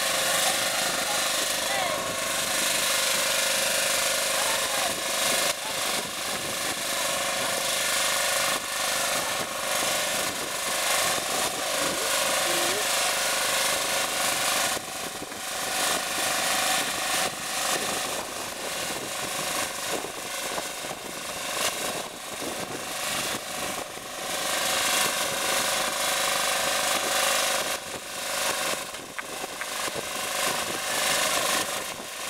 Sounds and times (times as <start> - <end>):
Outside, rural or natural: 0.0 - 32.3
Vibration: 0.0 - 32.3.